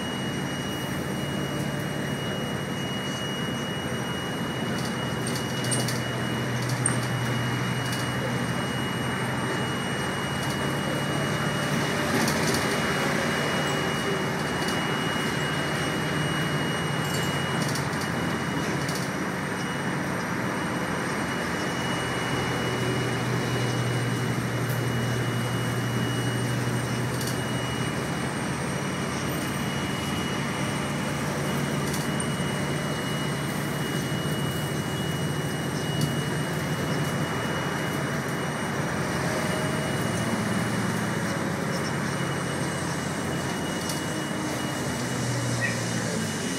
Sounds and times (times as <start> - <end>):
Traffic noise, roadway noise: 0.0 - 46.5.